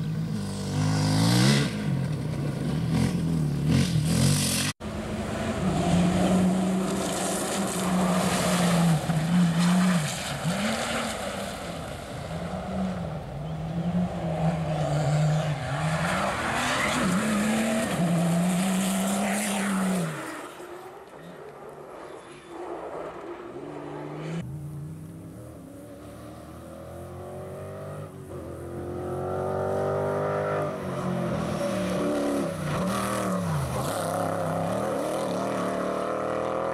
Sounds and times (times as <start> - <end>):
Vehicle: 0.0 - 36.7
Accelerating, revving, vroom: 0.3 - 2.0, 2.9 - 4.8, 5.7 - 11.5, 13.8 - 20.5, 25.9 - 36.7.